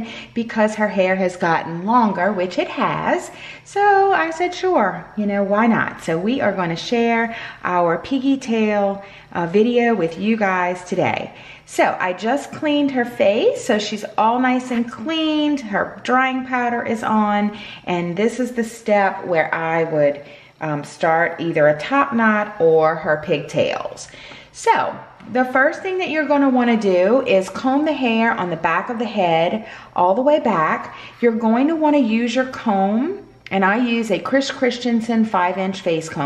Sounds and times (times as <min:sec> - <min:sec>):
Speech: 0:00.0 - 0:36.2.